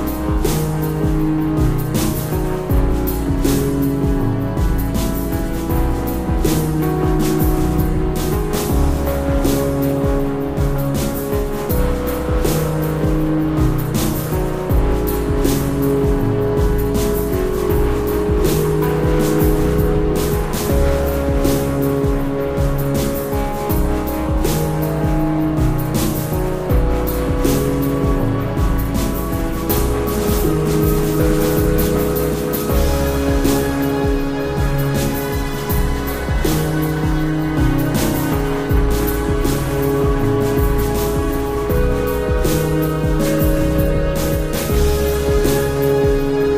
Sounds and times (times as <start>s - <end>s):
Video game music: 0.0s - 46.5s.